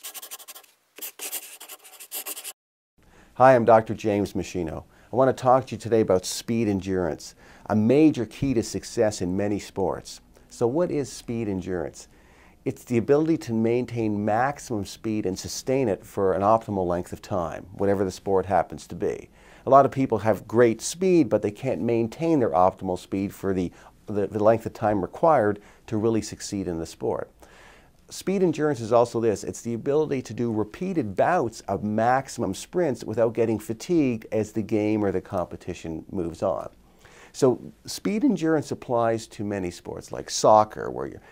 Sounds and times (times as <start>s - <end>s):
Speech: 3.4s - 27.3s, 28.1s - 36.8s, 37.4s - 41.2s.